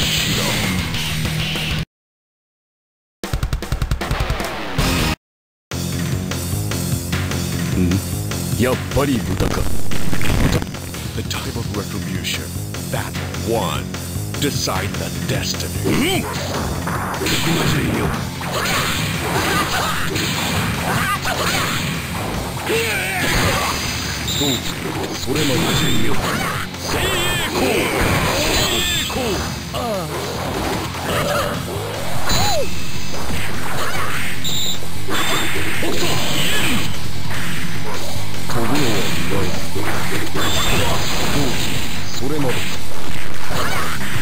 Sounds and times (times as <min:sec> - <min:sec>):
Music: 0:00.0 - 0:01.9, 0:03.3 - 0:44.2
Speech: 0:11.2 - 0:16.3, 0:17.2 - 0:18.1, 0:24.4 - 0:27.9, 0:38.5 - 0:42.7.